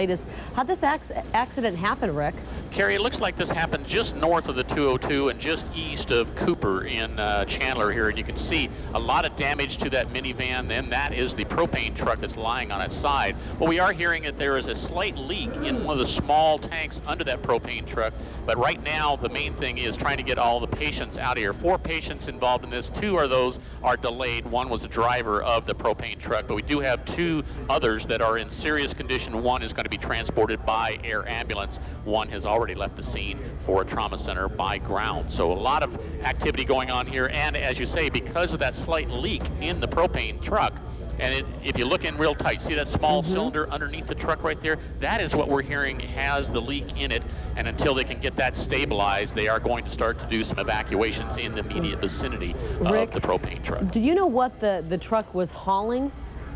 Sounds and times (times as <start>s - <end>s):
Speech: 0.0s - 56.1s.